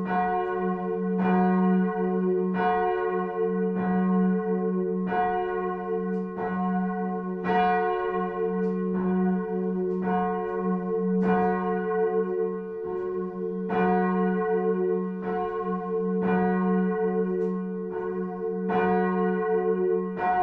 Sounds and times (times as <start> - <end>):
Bell: 0.0 - 20.4.